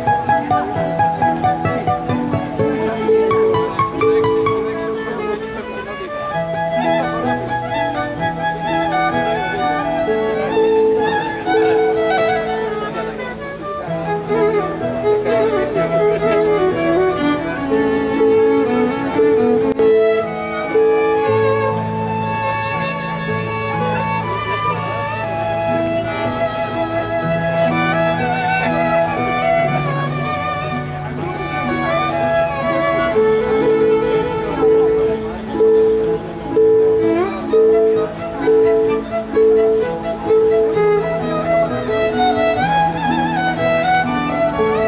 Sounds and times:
Wedding music: 0:00.0 - 0:44.8.

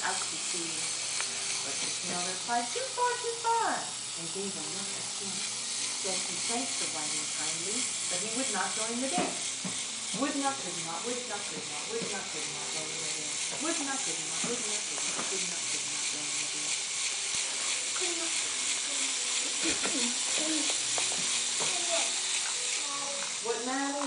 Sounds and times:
Hiss: 0:00.0 - 0:24.0
Speech: 0:10.2 - 0:16.7.

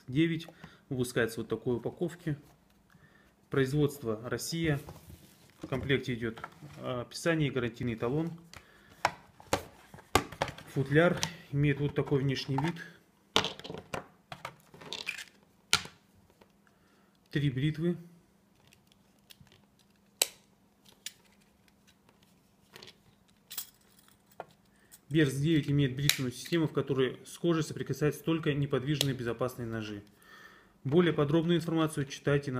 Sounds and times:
Speech: 0:00.0 - 0:02.5, 0:03.5 - 0:04.9, 0:05.7 - 0:08.4, 0:10.7 - 0:13.0, 0:17.3 - 0:18.2, 0:25.1 - 0:30.1, 0:30.8 - 0:32.5.

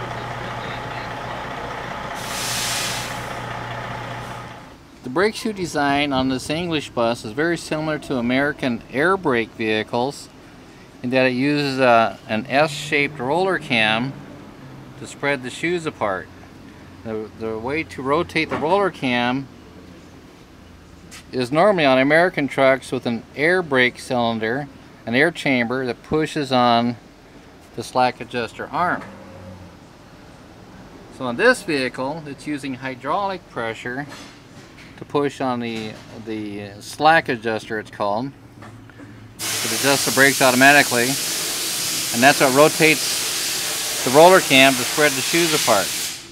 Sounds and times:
Speech: 0:00.0 - 0:01.4, 0:05.0 - 0:10.3, 0:11.0 - 0:14.2, 0:15.0 - 0:16.3, 0:17.0 - 0:19.5, 0:21.3 - 0:27.0, 0:27.7 - 0:29.0, 0:31.1 - 0:34.2, 0:35.0 - 0:38.4, 0:39.6 - 0:41.2, 0:42.1 - 0:43.2, 0:44.0 - 0:45.9.

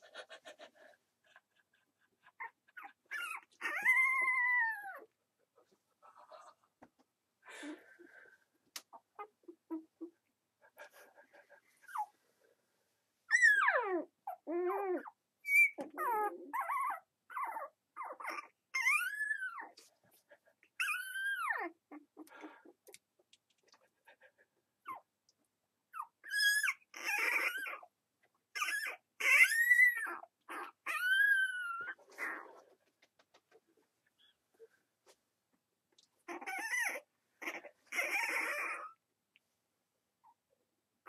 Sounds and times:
Canidae, dogs, wolves: 0:00.0 - 0:06.7, 0:13.3 - 0:22.9, 0:25.9 - 0:33.5, 0:36.2 - 0:39.0.

